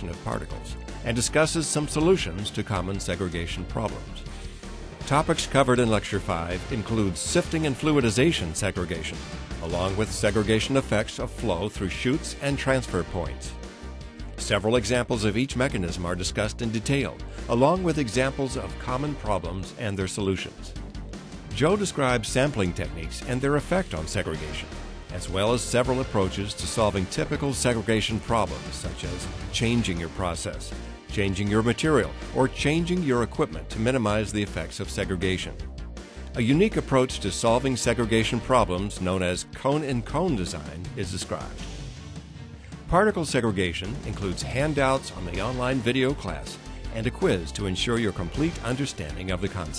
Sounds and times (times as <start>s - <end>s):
Speech: 0.0s - 4.2s, 5.1s - 13.6s, 14.4s - 20.8s, 21.5s - 35.6s, 36.4s - 41.6s, 42.9s - 49.7s
Music: 0.0s - 49.7s.